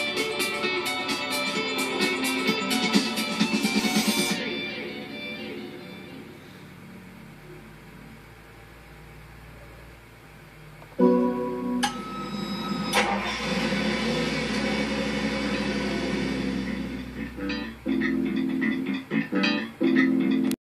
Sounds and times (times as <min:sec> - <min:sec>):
Music: 0:00.0 - 0:06.8, 0:11.0 - 0:20.6
Car: 0:12.6 - 0:17.4.